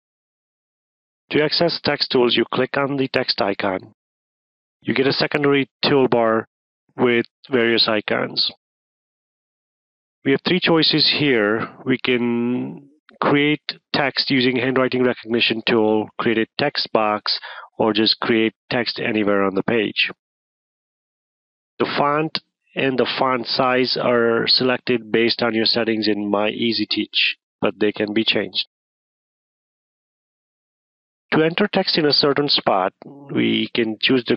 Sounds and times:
Speech: 0:01.3 - 0:04.0, 0:04.8 - 0:08.6, 0:10.3 - 0:20.2, 0:21.8 - 0:28.7, 0:31.3 - 0:34.3.

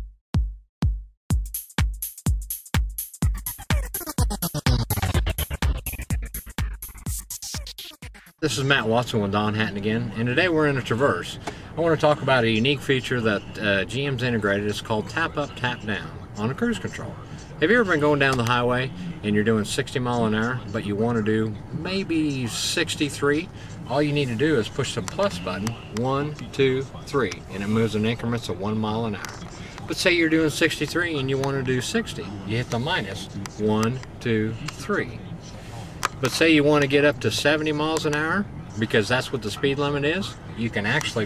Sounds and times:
Speech: 0:08.4 - 0:35.6, 0:36.2 - 0:41.2.

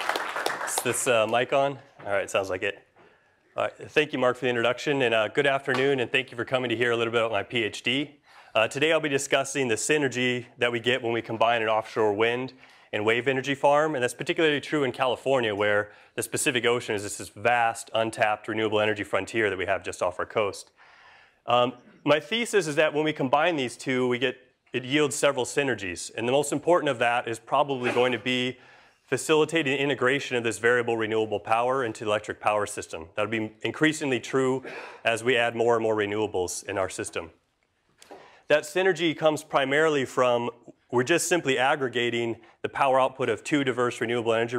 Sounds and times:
Speech: 0:00.7 - 0:02.8, 0:03.6 - 0:20.7, 0:21.4 - 0:37.4, 0:38.5 - 0:44.5.

